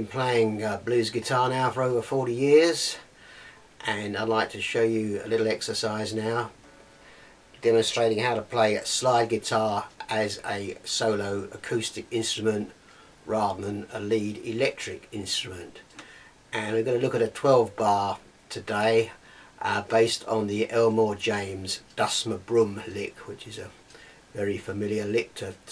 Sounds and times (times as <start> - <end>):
Speech: 0.0 - 3.1, 3.8 - 6.6, 7.6 - 15.8, 16.5 - 25.7.